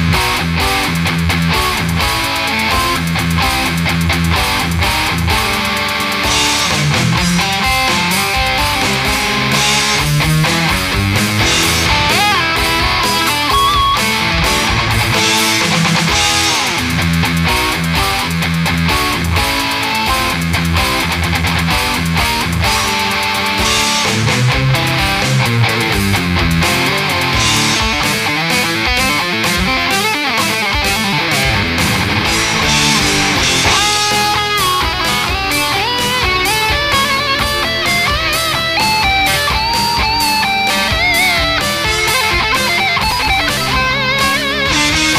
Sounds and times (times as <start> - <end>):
Strum: 0.0 - 45.1.